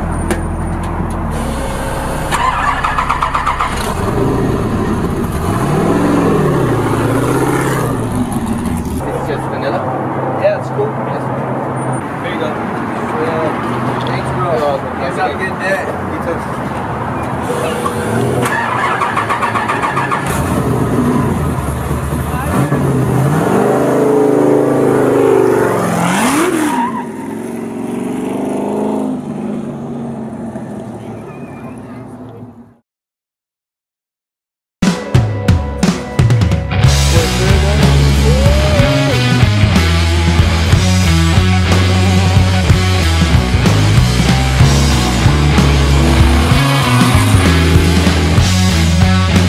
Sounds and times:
Car: 0:00.0 - 0:32.8, 0:36.9 - 0:49.4
Outside, urban or manmade: 0:00.0 - 0:32.8, 0:34.8 - 0:49.4
Speech: 0:09.0 - 0:11.4, 0:22.3 - 0:22.8, 0:31.0 - 0:32.6
Music: 0:34.8 - 0:49.4.

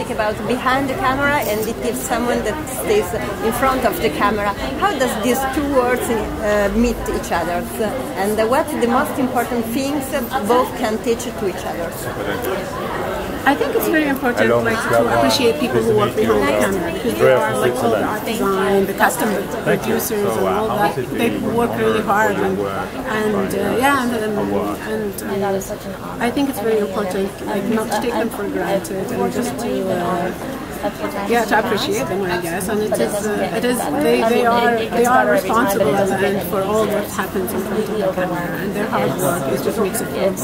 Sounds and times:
Speech: 0:00.0 - 0:40.4.

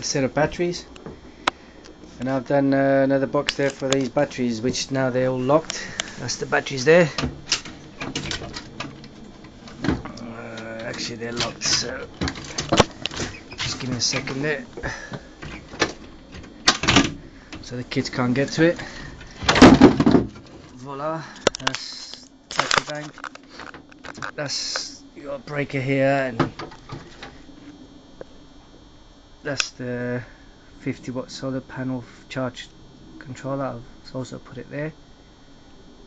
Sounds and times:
Speech: 0:00.0 - 0:00.9, 0:02.2 - 0:07.2, 0:10.1 - 0:12.2, 0:13.6 - 0:14.7, 0:17.6 - 0:18.9, 0:20.8 - 0:23.2, 0:24.3 - 0:26.5, 0:29.5 - 0:35.0.

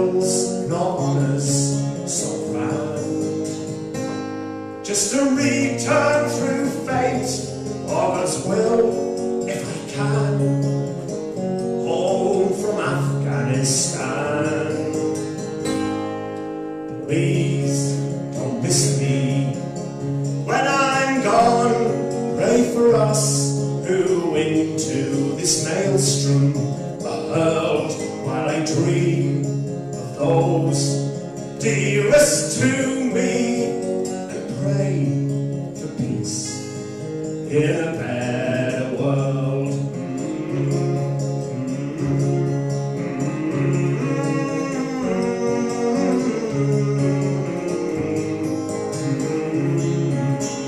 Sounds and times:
Strum: 0:00.0 - 0:50.6.

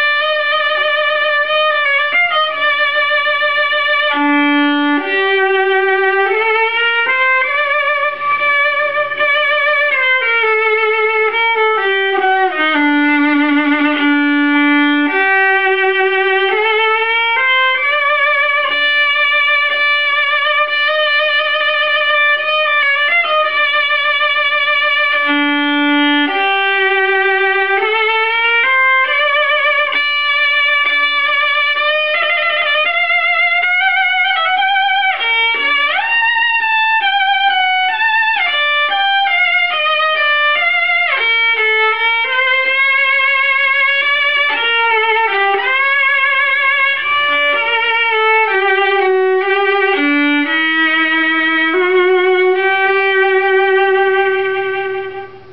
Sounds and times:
Violin, fiddle: 0:00.0 - 0:55.5.

